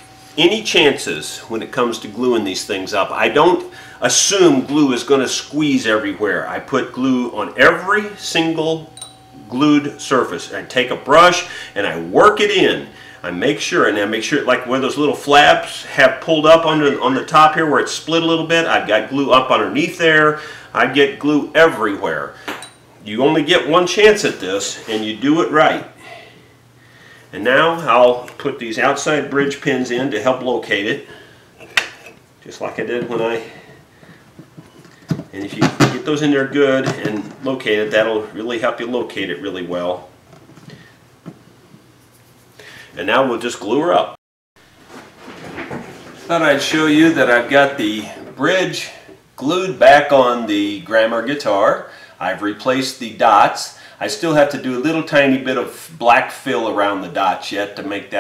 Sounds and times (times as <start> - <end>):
Inside, small room: 0.0 - 58.2
Speech: 0.4 - 22.4, 23.0 - 26.0, 27.3 - 31.1, 32.4 - 33.6, 35.3 - 40.1, 43.0 - 44.2, 46.2 - 58.2.